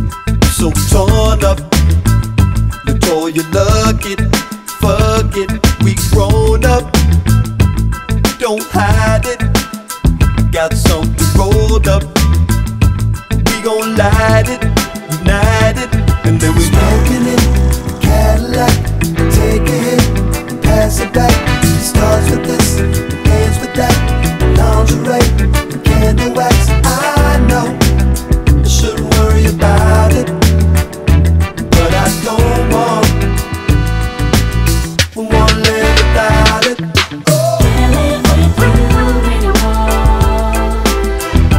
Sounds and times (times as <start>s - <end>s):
Afrobeat: 0.0s - 41.5s.